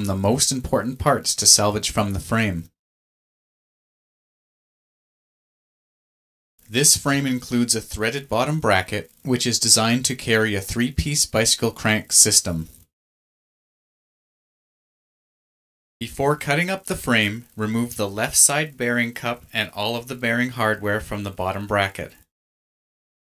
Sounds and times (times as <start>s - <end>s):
Speech: 0.0s - 2.8s, 6.7s - 12.8s, 16.0s - 22.3s.